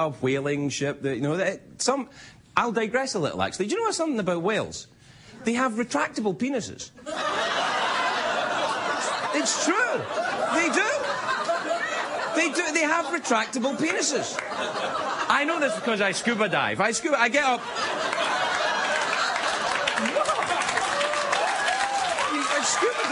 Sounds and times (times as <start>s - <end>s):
Narration, monologue: 0.0s - 18.3s, 22.2s - 23.1s.